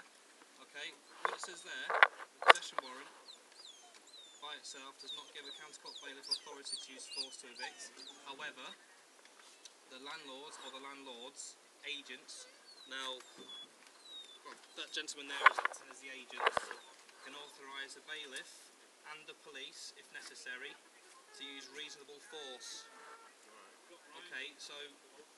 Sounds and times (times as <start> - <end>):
Speech: 0.6 - 3.1, 4.4 - 8.8, 9.9 - 13.6, 14.5 - 25.3.